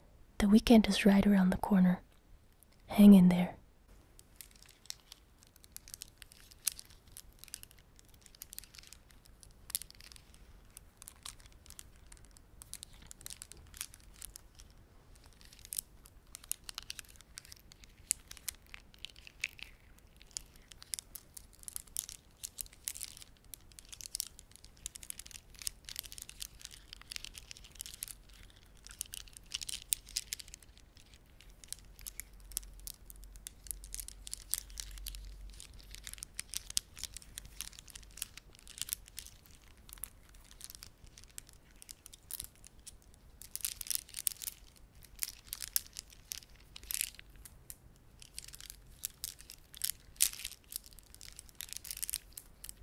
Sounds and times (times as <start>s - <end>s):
Crumpling, crinkling: 4.2s - 52.8s.